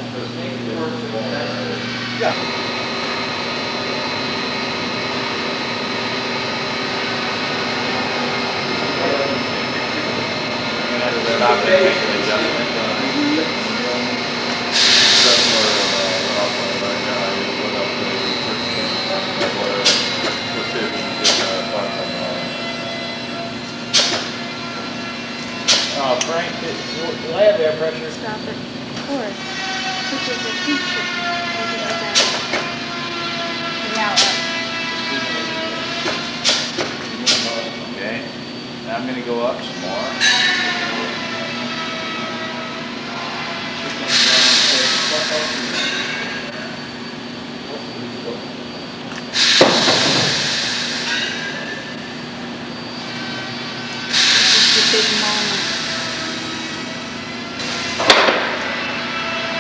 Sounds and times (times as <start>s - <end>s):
Inside, large room or hall: 0.0s - 59.6s.